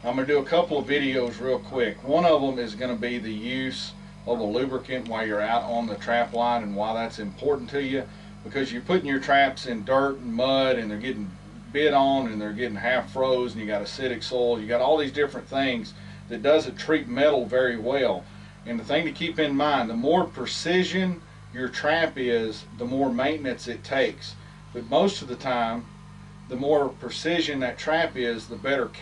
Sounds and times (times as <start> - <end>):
Speech: 0.0 - 25.9, 26.5 - 29.0.